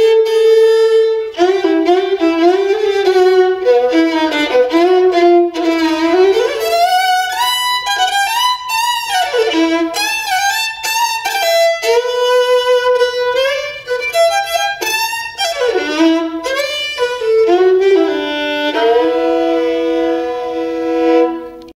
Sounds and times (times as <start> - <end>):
Violin, fiddle: 0.0 - 21.7.